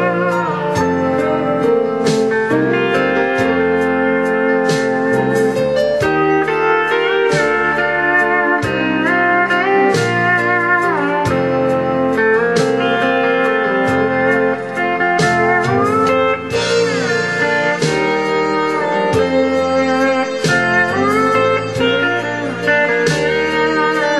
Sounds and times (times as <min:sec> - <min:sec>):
Country: 0:00.0 - 0:24.1
Steel guitar, slide guitar: 0:00.0 - 0:24.1.